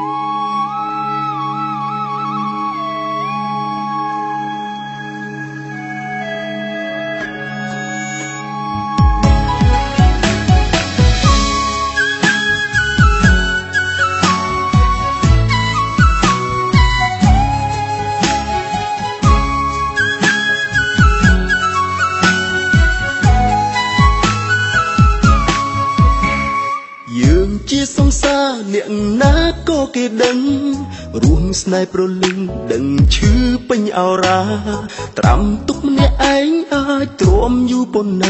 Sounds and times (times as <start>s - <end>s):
Music: 0.0s - 38.3s.